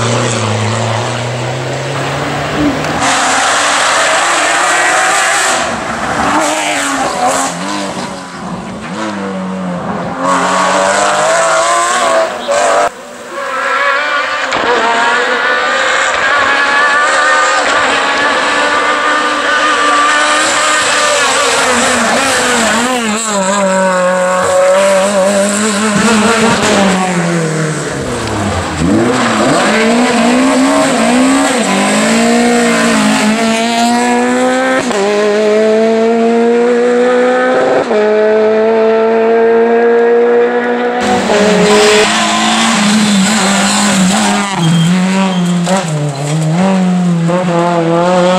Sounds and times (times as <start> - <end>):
Race car, auto racing: 0.0 - 48.3.